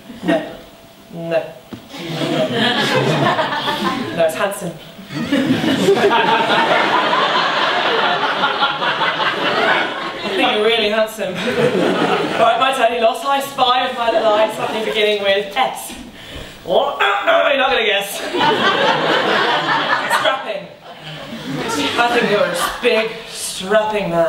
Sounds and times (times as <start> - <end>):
Speech: 4.0 - 4.8, 10.2 - 11.4, 12.4 - 16.1, 16.7 - 18.3, 20.1 - 20.8, 21.4 - 24.2.